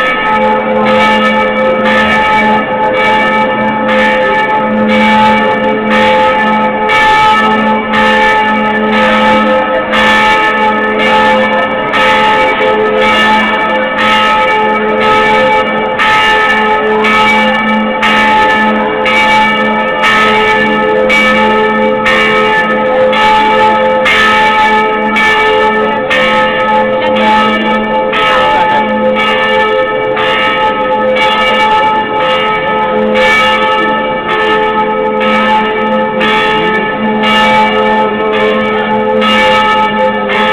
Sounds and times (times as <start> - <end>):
Church bell: 0.0 - 40.5.